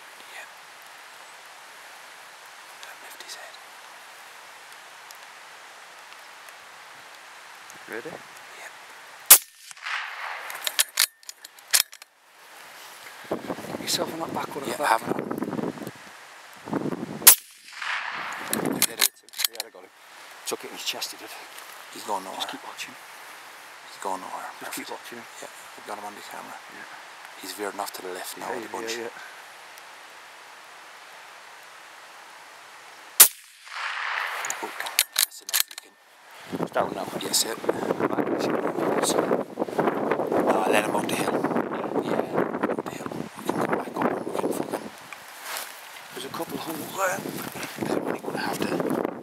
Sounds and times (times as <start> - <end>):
Gunshot, gunfire: 33.2 - 34.9.